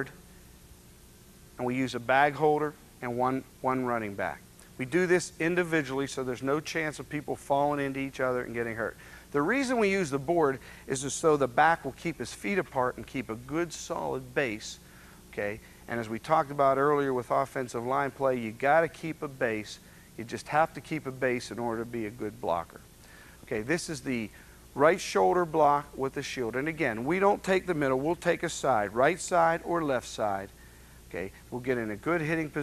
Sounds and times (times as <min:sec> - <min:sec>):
Speech: 0:01.6 - 0:22.9, 0:23.5 - 0:32.6.